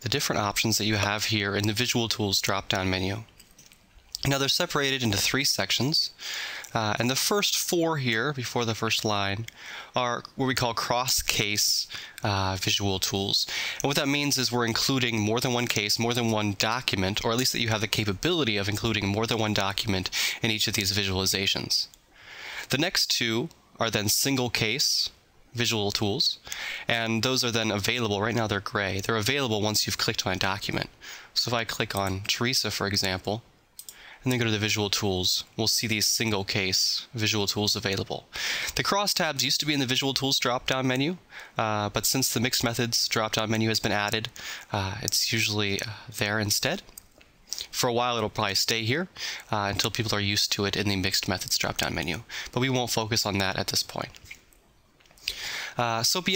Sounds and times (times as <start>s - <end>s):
Speech: 0.0s - 3.3s, 4.2s - 22.0s, 22.7s - 33.5s, 34.2s - 46.9s, 47.6s - 54.2s, 55.8s - 56.3s.